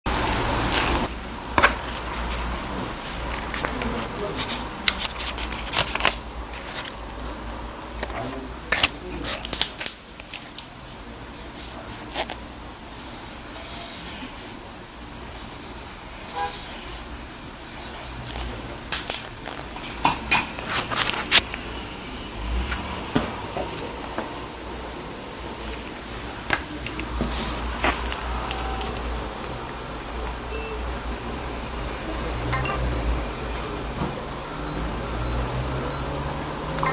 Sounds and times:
Speech: 0:03.6 - 0:04.9, 0:08.0 - 0:09.8.

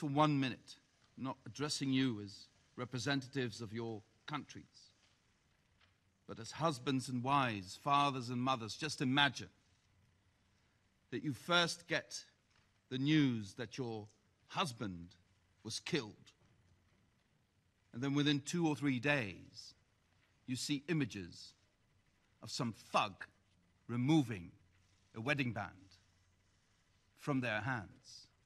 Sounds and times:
Male speech, man speaking: 0:00.0 - 0:04.9, 0:06.3 - 0:09.6, 0:11.1 - 0:16.4, 0:18.0 - 0:19.8, 0:20.5 - 0:21.6, 0:22.4 - 0:26.0, 0:27.2 - 0:28.4
Narration, monologue: 0:00.0 - 0:28.4.

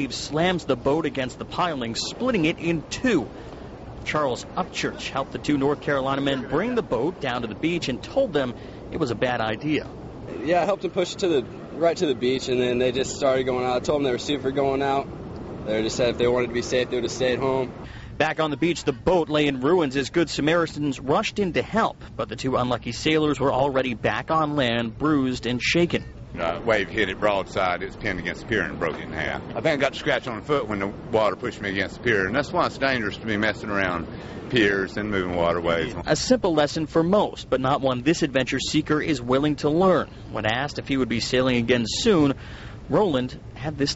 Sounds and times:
Speech: 0:00.0 - 0:03.3, 0:04.0 - 0:43.9.

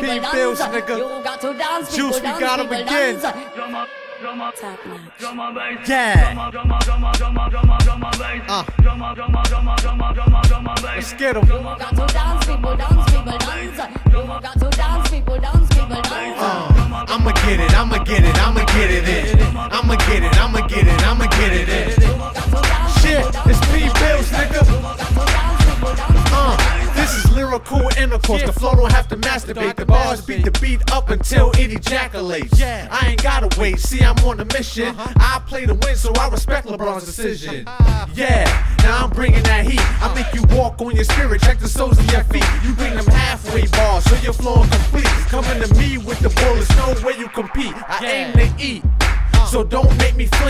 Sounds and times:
Hip hop music: 0:00.0 - 0:50.4.

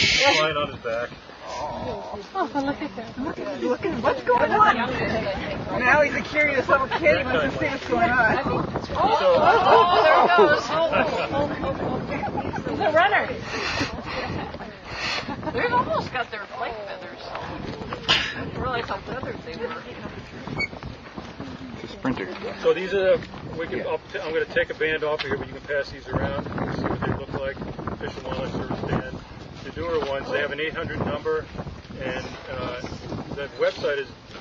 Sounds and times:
Hubbub, speech noise, speech babble: 0:00.0 - 0:34.4.

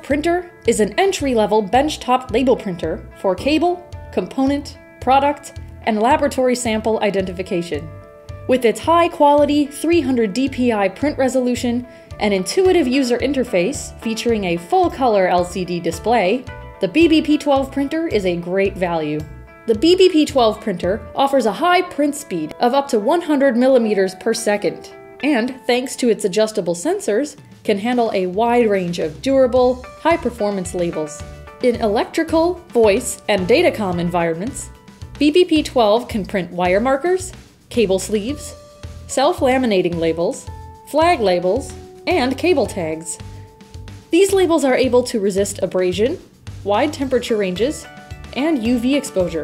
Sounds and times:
Speech: 0:00.0 - 0:07.9, 0:08.5 - 0:43.2, 0:44.1 - 0:49.4
Music: 0:00.0 - 0:49.4.

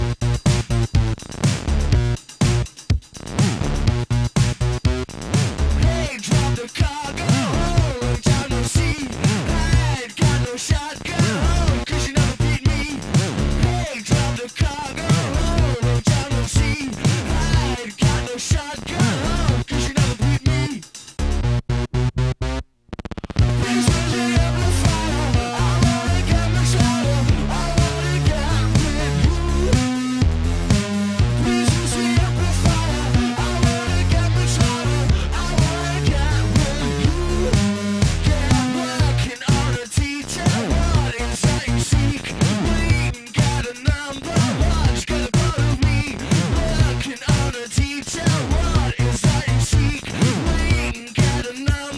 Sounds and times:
Music: 0:00.0 - 0:51.9.

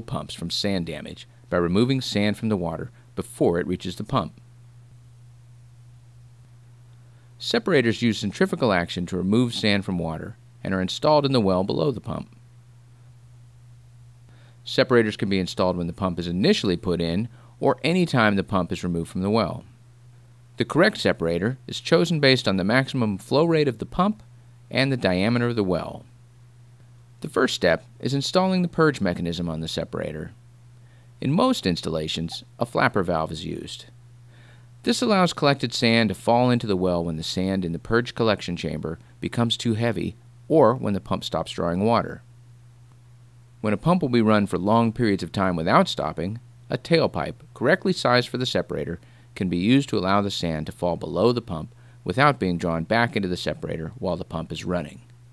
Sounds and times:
Speech: 0:00.0 - 0:04.4, 0:07.4 - 0:12.4, 0:14.7 - 0:19.8, 0:20.6 - 0:26.1, 0:27.2 - 0:30.4, 0:31.2 - 0:34.0, 0:34.8 - 0:42.3, 0:43.6 - 0:55.1.

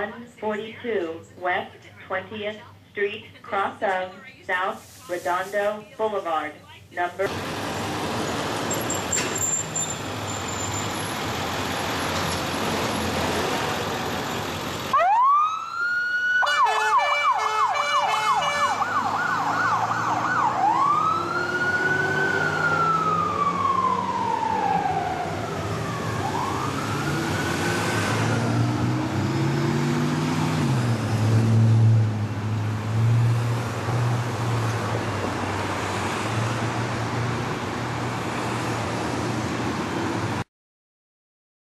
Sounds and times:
Police car (siren): 0:14.9 - 0:28.9.

